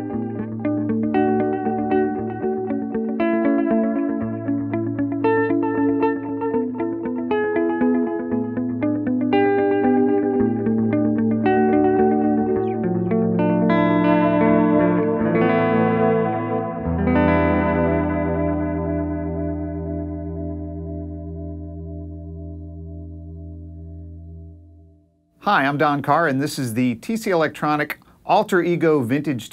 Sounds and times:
Music: 0:00.0 - 0:26.4.

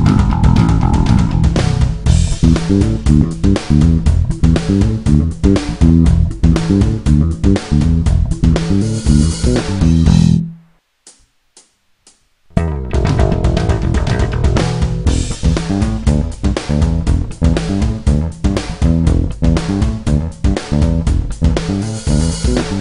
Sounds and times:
Music: 0:00.0 - 0:22.8.

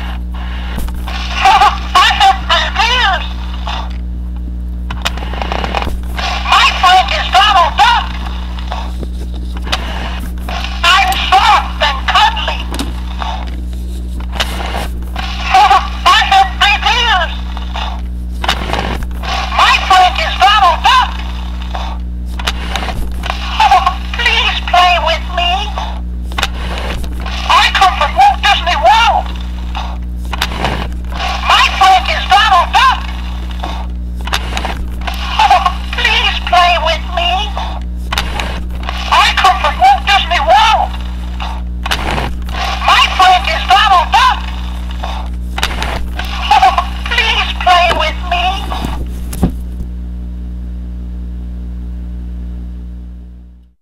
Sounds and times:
Speech: 0:01.4 - 0:03.3, 0:06.5 - 0:08.1, 0:10.8 - 0:12.7, 0:15.5 - 0:17.4, 0:19.6 - 0:21.2, 0:23.6 - 0:25.9, 0:27.5 - 0:29.3, 0:31.4 - 0:33.0, 0:35.4 - 0:37.7, 0:39.1 - 0:40.9, 0:42.8 - 0:44.4, 0:46.4 - 0:48.8.

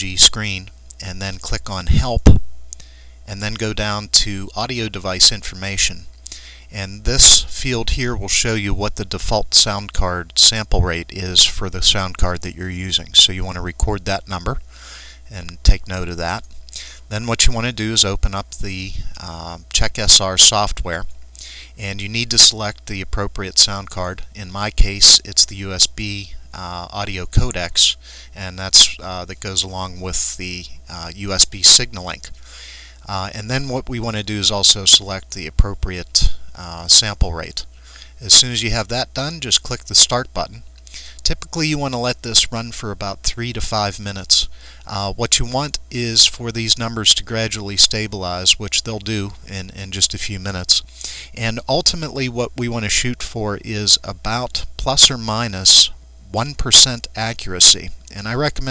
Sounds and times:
Speech: 0:00.0 - 0:02.4, 0:03.3 - 0:06.1, 0:06.7 - 0:14.6, 0:15.3 - 0:16.4, 0:17.1 - 0:32.3, 0:33.1 - 0:58.7.

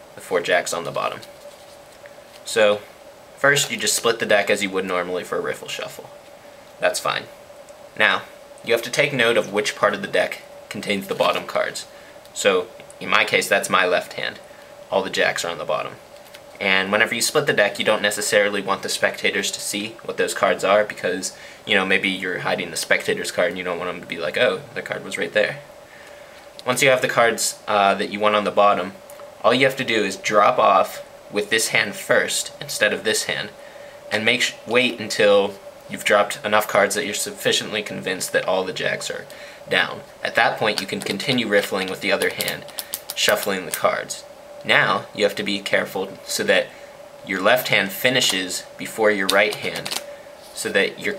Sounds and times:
Speech: 0:00.2 - 0:01.3, 0:02.4 - 0:06.1, 0:06.8 - 0:07.3, 0:08.0 - 0:16.0, 0:16.6 - 0:25.7, 0:26.6 - 0:50.0, 0:50.6 - 0:51.1.

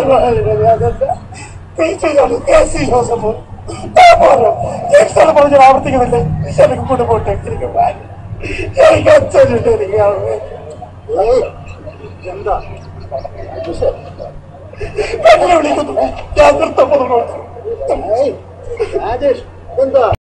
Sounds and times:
Speech: 0:00.0 - 0:01.2, 0:01.8 - 0:08.0, 0:08.8 - 0:14.4, 0:15.2 - 0:20.2.

